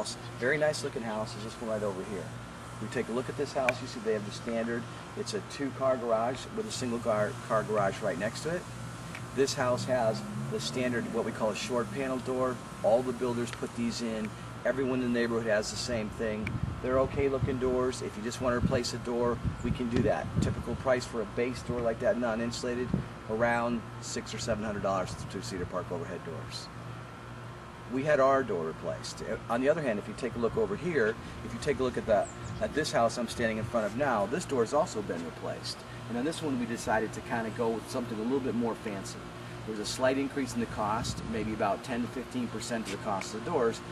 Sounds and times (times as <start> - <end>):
Speech: 0.0 - 8.7, 9.4 - 26.7, 27.9 - 43.9.